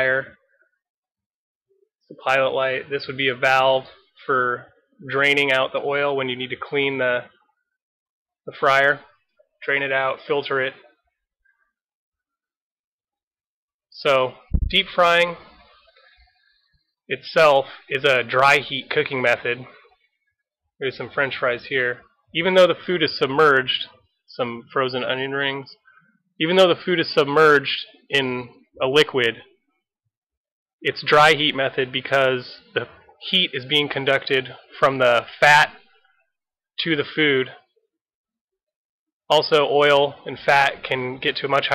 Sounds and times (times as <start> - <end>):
Speech: 0.0 - 0.4, 2.1 - 7.4, 8.5 - 11.0, 13.9 - 15.6, 17.1 - 19.9, 20.8 - 25.8, 26.4 - 29.6, 30.8 - 35.8, 36.8 - 37.8, 39.3 - 41.7.